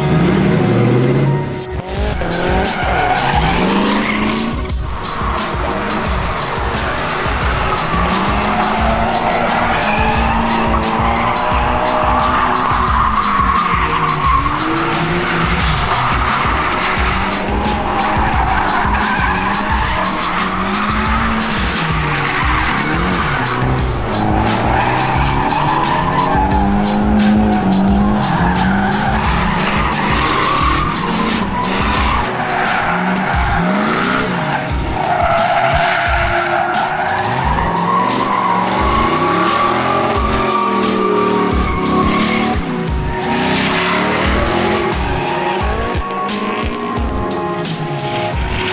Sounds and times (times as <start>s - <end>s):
Car: 0.0s - 48.7s
Music: 0.0s - 48.7s.